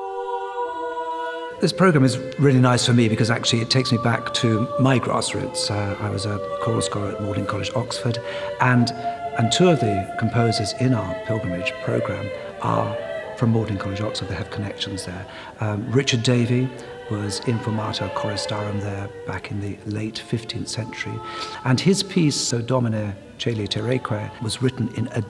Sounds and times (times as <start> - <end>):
Music: 0.0 - 25.3
Speech: 1.6 - 25.3.